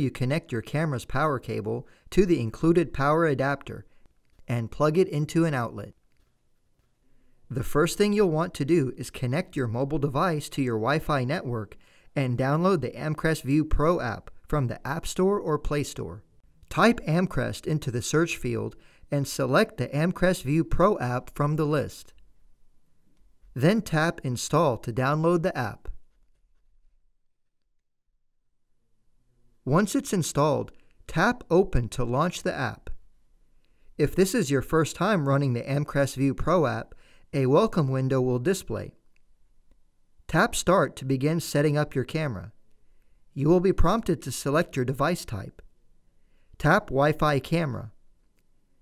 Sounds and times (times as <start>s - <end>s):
Speech: 0.0s - 3.9s, 4.5s - 6.0s, 7.5s - 22.2s, 23.6s - 26.0s, 29.7s - 33.0s, 34.0s - 39.0s, 40.3s - 42.6s, 43.4s - 45.7s, 46.6s - 48.0s.